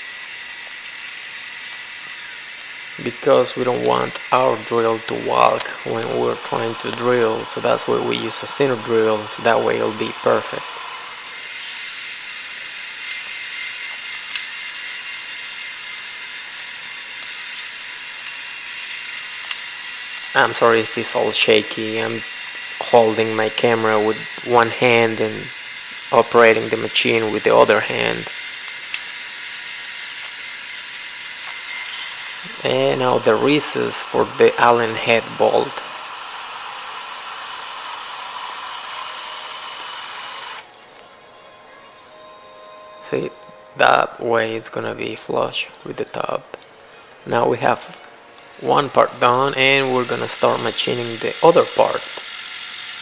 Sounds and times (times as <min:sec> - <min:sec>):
Drill: 0:00.0 - 0:40.7, 0:48.4 - 0:53.0.